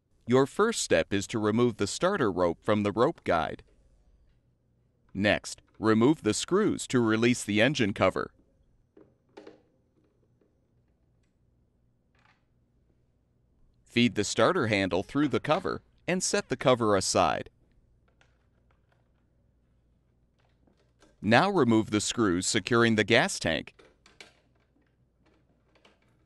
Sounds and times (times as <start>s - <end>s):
Speech: 0.3s - 3.6s, 5.2s - 8.3s, 13.9s - 17.5s, 21.2s - 23.7s.